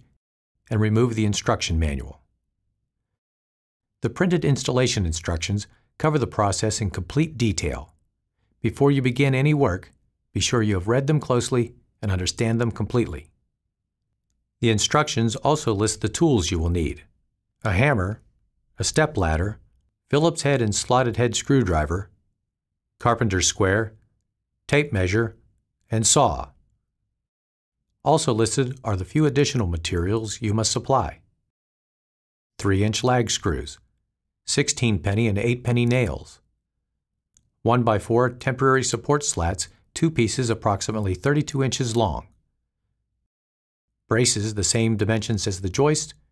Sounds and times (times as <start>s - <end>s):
Speech: 0.7s - 2.3s, 4.0s - 8.0s, 8.6s - 13.4s, 14.6s - 22.2s, 23.0s - 24.0s, 24.7s - 26.6s, 28.0s - 31.3s, 32.6s - 33.8s, 34.5s - 36.5s, 37.6s - 42.4s, 44.1s - 46.2s.